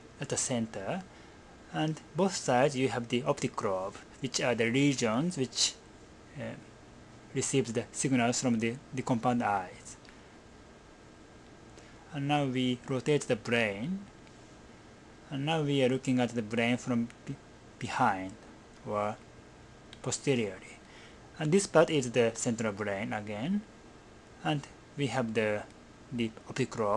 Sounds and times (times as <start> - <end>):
Speech: 0.2 - 1.1, 1.7 - 6.7, 7.3 - 10.0, 12.1 - 14.1, 15.3 - 19.2, 20.0 - 20.8, 21.4 - 23.7, 24.4 - 26.9.